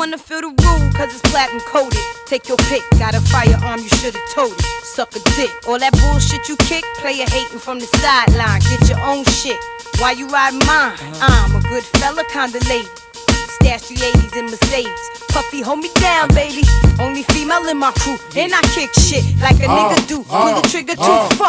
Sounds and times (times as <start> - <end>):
Music: 0.0 - 21.4.